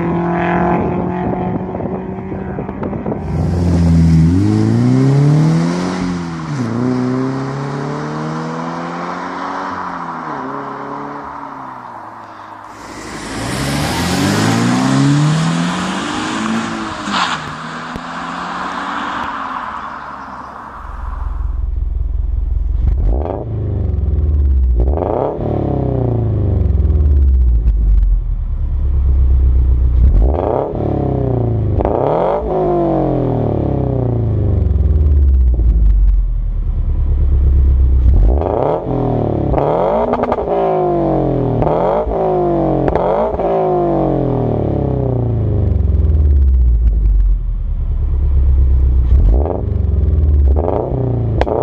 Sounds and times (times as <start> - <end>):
Accelerating, revving, vroom: 0.0 - 11.6, 12.8 - 19.3, 22.9 - 27.3, 30.0 - 35.3, 38.0 - 46.6, 49.0 - 51.6
Car: 0.0 - 51.6.